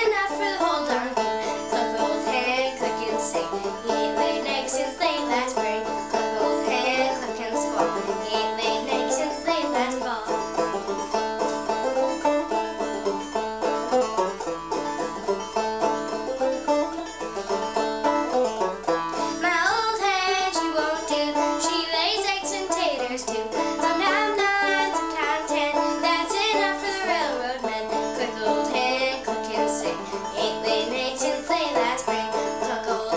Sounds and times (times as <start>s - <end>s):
Music: 0.0s - 33.1s.